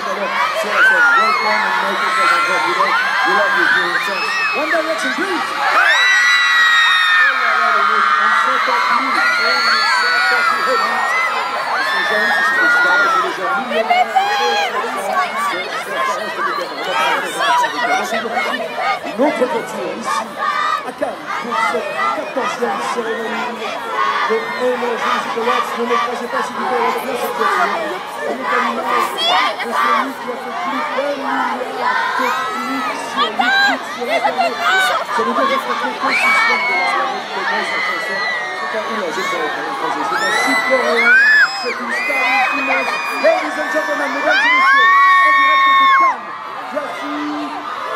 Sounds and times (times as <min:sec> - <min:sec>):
Child speech, kid speaking: 0:27.2 - 0:32.2.